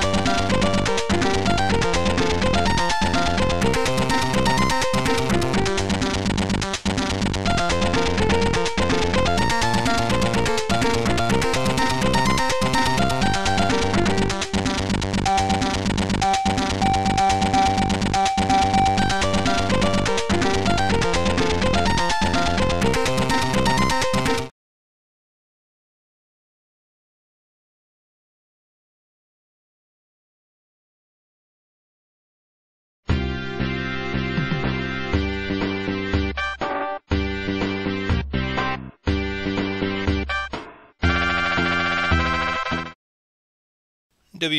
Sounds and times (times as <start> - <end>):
Music: 0.0 - 24.5, 33.1 - 43.0.